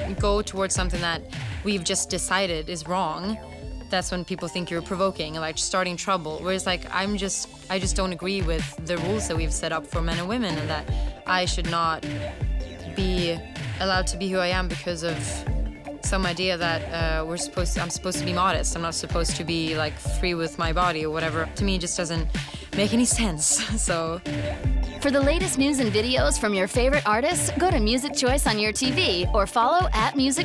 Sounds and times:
Speech: 0.0 - 12.0, 12.9 - 15.4, 16.1 - 24.2, 25.0 - 30.4
Music: 0.0 - 30.4.

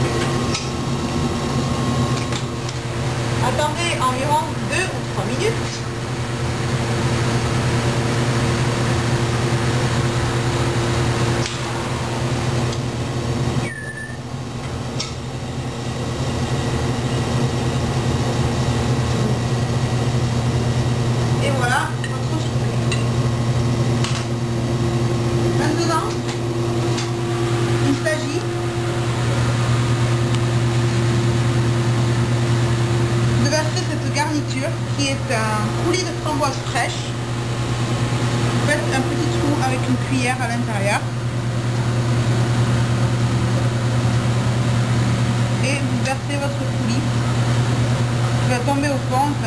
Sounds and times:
Microwave oven: 0.0 - 49.4
Speech: 3.4 - 5.9, 21.4 - 22.7, 25.6 - 26.2, 27.8 - 28.5, 33.4 - 37.2, 38.7 - 41.1, 45.6 - 47.1, 48.5 - 49.4.

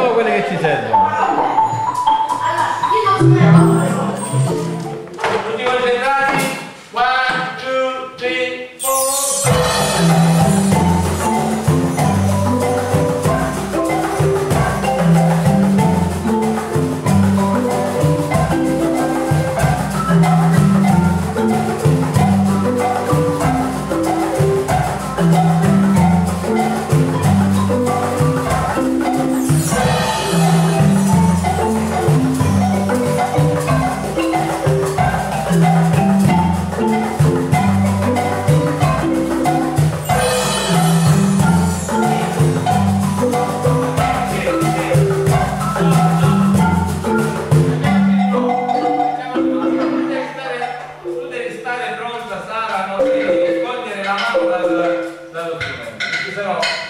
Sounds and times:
Speech: 0.0 - 1.3, 5.4 - 8.8, 49.2 - 56.8
Marimba, xylophone: 0.8 - 5.8, 8.8 - 56.8.

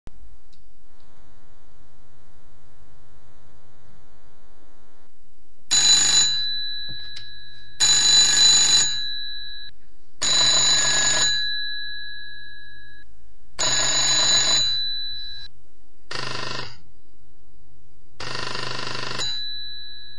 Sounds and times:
Telephone bell ringing: 5.7 - 15.5, 18.2 - 20.1.

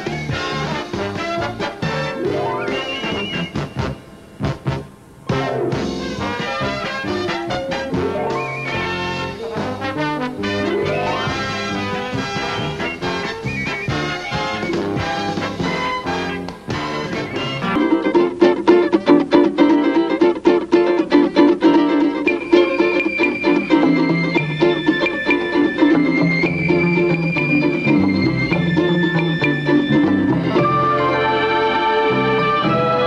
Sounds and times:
Ukulele: 0.0 - 33.0.

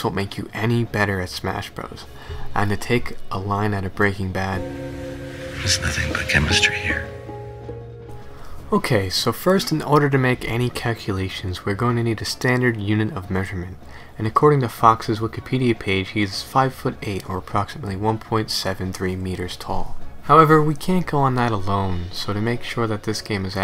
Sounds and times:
Speech: 0.0 - 4.6, 5.6 - 7.2, 8.7 - 23.6
Music: 4.5 - 10.2.

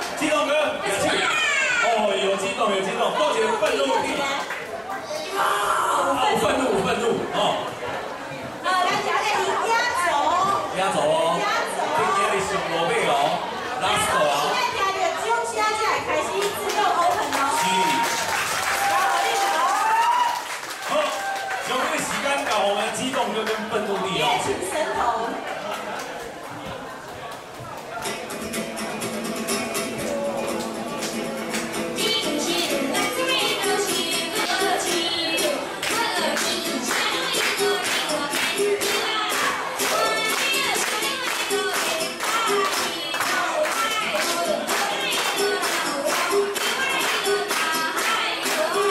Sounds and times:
Child speech, kid speaking: 0.9 - 1.9, 4.9 - 6.4.

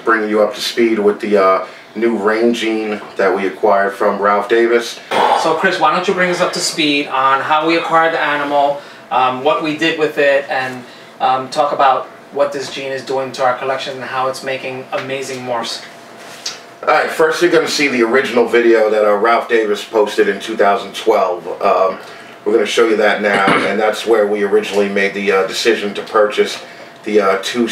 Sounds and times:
Speech: 0.0 - 15.9, 16.5 - 27.7.

